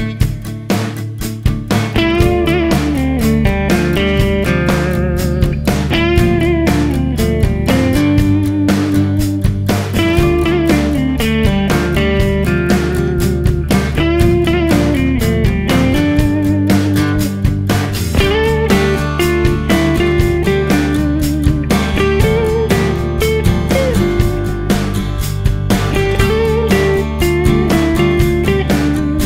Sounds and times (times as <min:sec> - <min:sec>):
Music: 0:00.0 - 0:29.2.